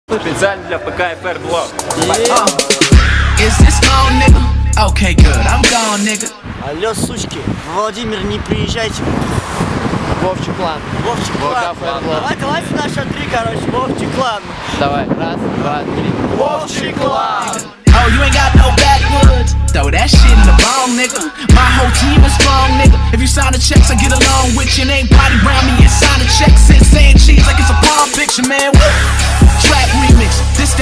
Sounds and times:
Speech: 0:00.1 - 0:02.8, 0:06.6 - 0:09.1, 0:10.2 - 0:17.6
Traffic noise, roadway noise: 0:00.1 - 0:30.8
Music: 0:01.6 - 0:06.4, 0:17.5 - 0:30.8.

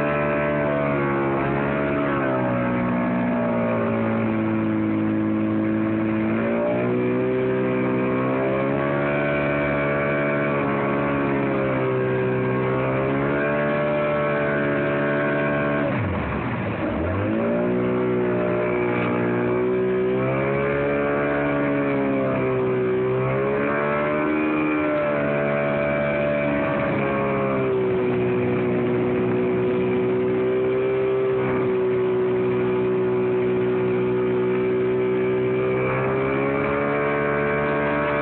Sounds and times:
Motorboat, speedboat: 0:00.0 - 0:38.2.

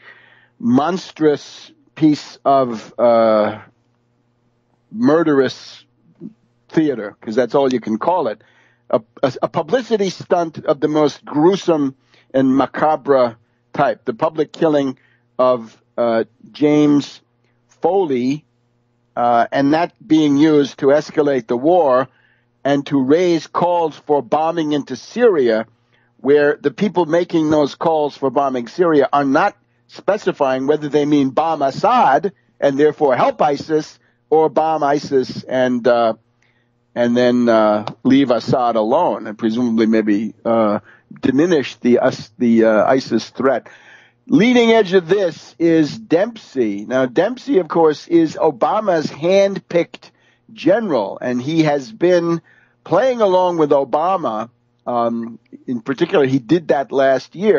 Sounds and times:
Speech: 0:00.6 - 0:03.7, 0:04.9 - 0:17.2, 0:17.8 - 0:18.4, 0:19.2 - 0:36.2, 0:37.0 - 0:57.5.

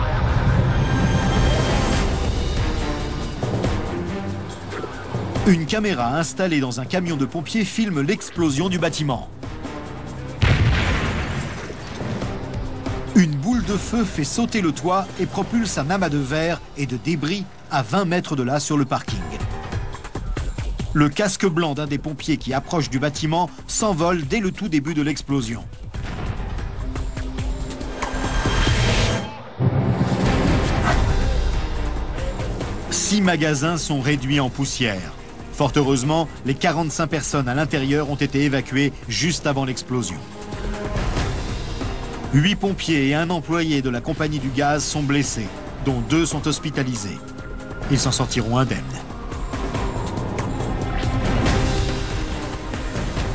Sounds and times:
Music: 0:00.0 - 0:53.3
Speech: 0:05.4 - 0:09.3, 0:13.2 - 0:19.5, 0:21.0 - 0:25.7, 0:32.9 - 0:40.2, 0:42.3 - 0:47.2, 0:47.9 - 0:49.0.

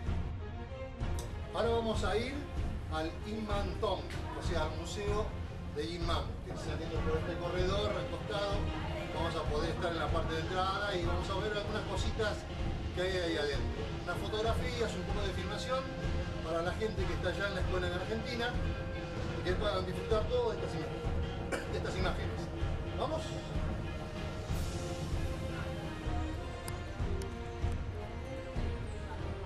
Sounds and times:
Music: 0:00.0 - 0:29.4
Speech: 0:01.5 - 0:12.4, 0:13.0 - 0:18.6, 0:19.4 - 0:20.9, 0:21.5 - 0:23.4.

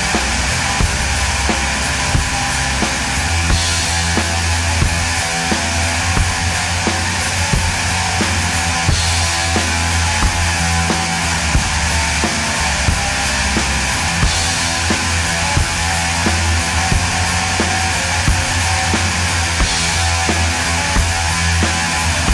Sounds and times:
Music: 0:00.0 - 0:22.3.

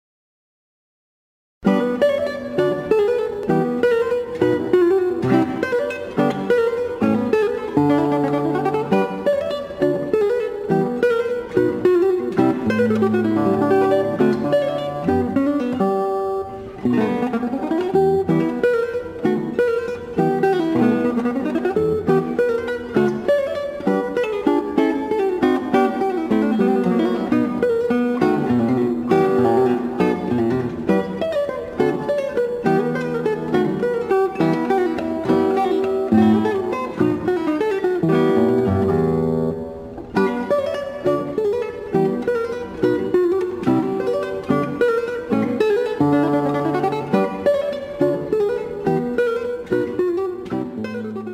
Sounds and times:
Guitar: 0:01.6 - 0:51.3.

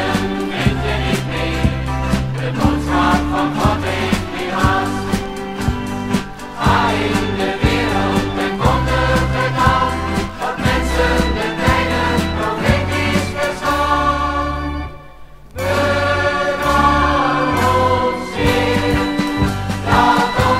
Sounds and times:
Music: 0:00.0 - 0:20.5.

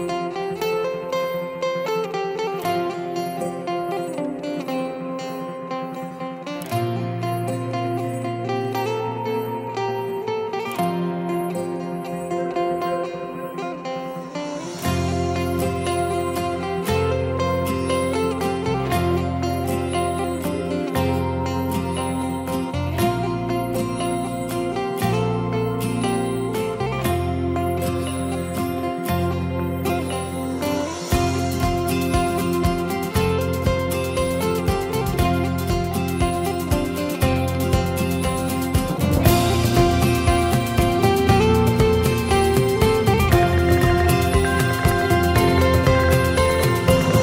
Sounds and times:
Tender music: 0:00.0 - 0:47.2.

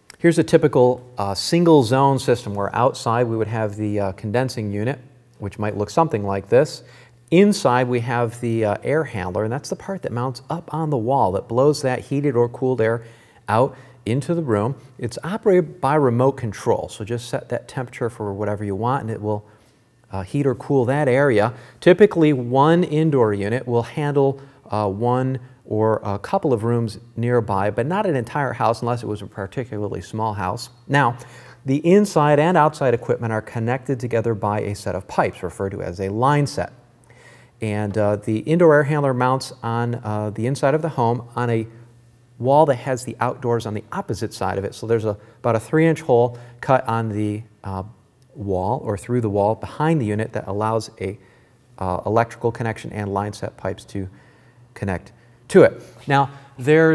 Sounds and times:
Speech: 0:00.1 - 0:19.5, 0:20.1 - 0:36.8, 0:37.6 - 0:51.2, 0:51.8 - 0:54.2, 0:54.8 - 0:56.9.

